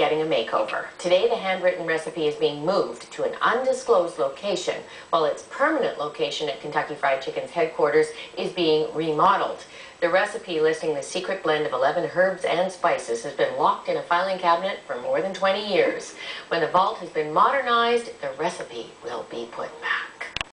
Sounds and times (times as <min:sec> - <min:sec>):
Speech: 0:00.0 - 0:20.4.